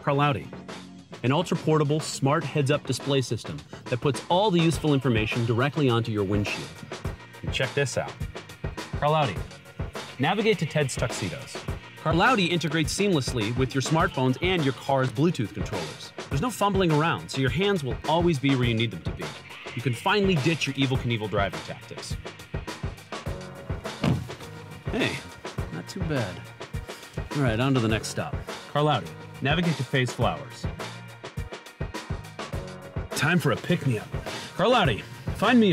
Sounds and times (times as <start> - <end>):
Speech: 0.0 - 0.6, 1.2 - 6.8, 7.4 - 8.2, 9.0 - 9.5, 10.2 - 22.2, 24.9 - 26.5, 27.3 - 30.7, 33.2 - 35.7
Music: 0.0 - 35.7.